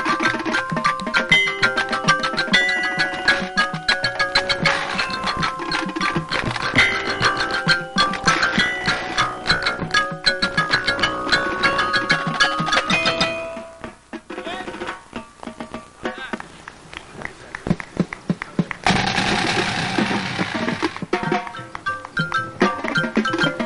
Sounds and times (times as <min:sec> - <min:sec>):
Music: 0:00.0 - 0:23.6
Speech: 0:14.3 - 0:14.8, 0:16.0 - 0:16.4.